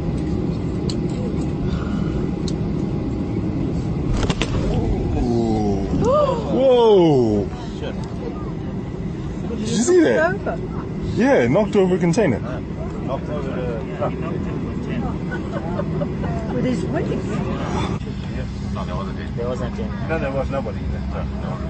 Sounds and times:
Vehicle: 0.0s - 21.6s.

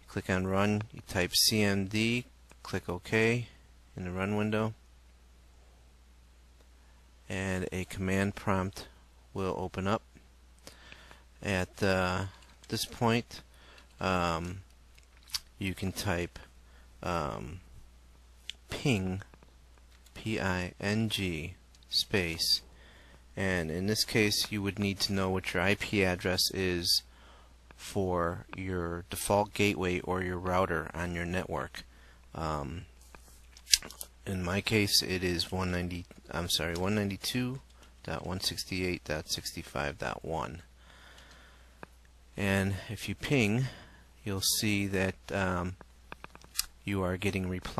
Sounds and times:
Speech: 0.0s - 4.8s, 7.3s - 10.1s, 11.4s - 13.4s, 14.0s - 14.6s, 15.6s - 17.6s, 18.5s - 19.3s, 20.2s - 22.6s, 23.4s - 27.1s, 27.8s - 32.9s, 34.2s - 40.7s, 42.4s - 45.8s, 46.8s - 47.7s.

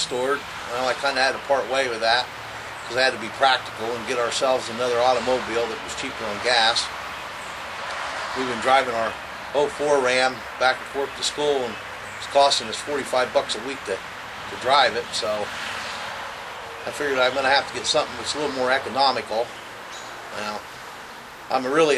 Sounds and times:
Speech: 0.0s - 2.3s, 2.9s - 6.9s, 8.4s - 15.5s, 16.8s - 19.5s, 20.3s - 20.6s, 21.5s - 21.9s.

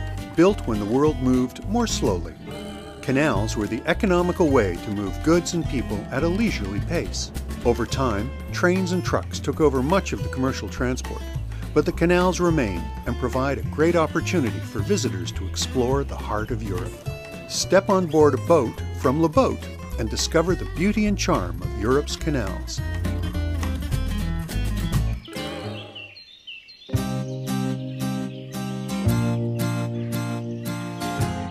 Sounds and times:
Music: 0.0s - 25.8s, 26.9s - 31.5s
Speech: 0.4s - 2.4s, 3.0s - 22.9s.

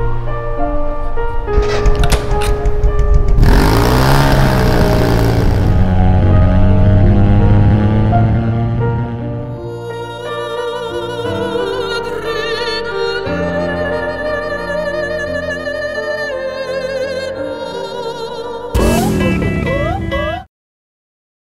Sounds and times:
Music: 0.0s - 20.5s.

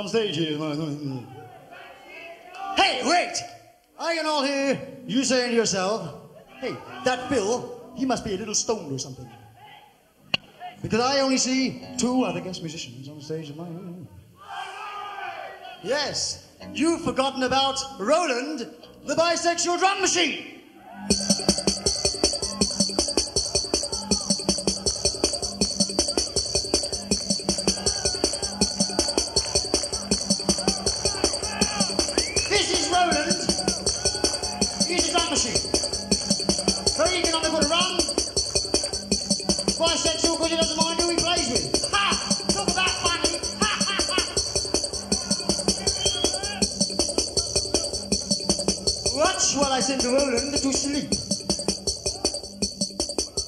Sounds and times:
Bass drum: 21.1s - 53.4s.

